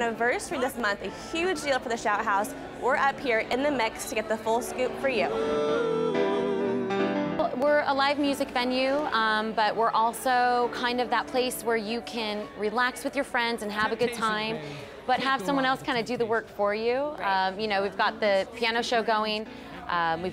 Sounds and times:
Music: 3.8s - 12.4s.

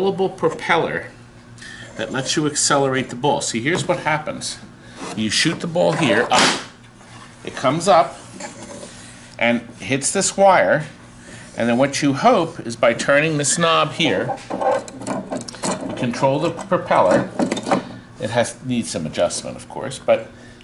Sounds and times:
Speech: 0.0s - 1.2s, 2.0s - 4.6s, 5.2s - 6.6s, 7.4s - 8.2s, 9.4s - 11.0s, 11.6s - 14.4s, 15.9s - 17.3s, 18.2s - 20.3s.

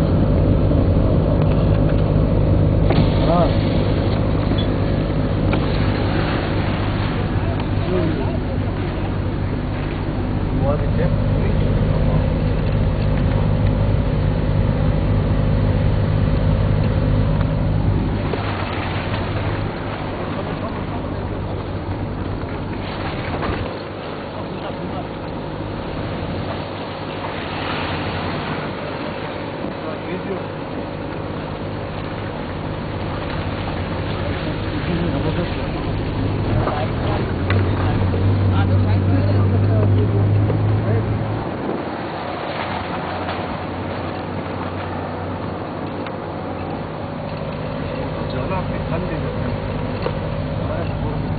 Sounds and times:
Car: 0.0s - 51.3s
Outside, rural or natural: 0.0s - 51.3s
Speech: 3.2s - 3.6s, 7.3s - 9.1s, 10.5s - 12.4s, 24.4s - 25.3s, 29.7s - 30.6s, 34.2s - 41.2s, 48.3s - 49.4s, 50.6s - 51.3s.

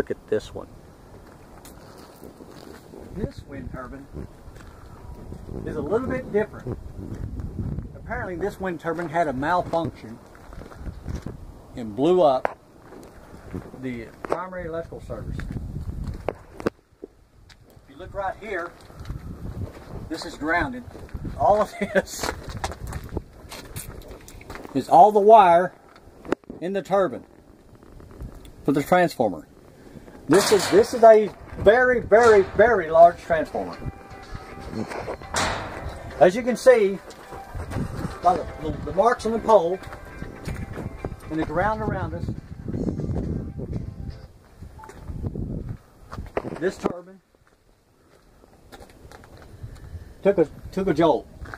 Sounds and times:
Wind noise (microphone): 1.6s - 8.7s, 9.5s - 11.8s, 14.6s - 24.6s, 27.6s - 28.7s, 31.3s - 36.2s, 37.4s - 39.0s, 40.1s - 46.6s, 49.0s - 51.5s.

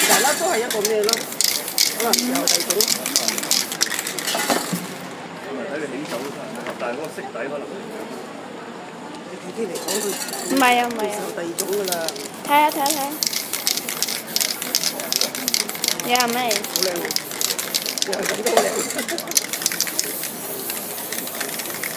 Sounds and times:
Spray: 0.0s - 4.7s, 11.6s - 21.9s.

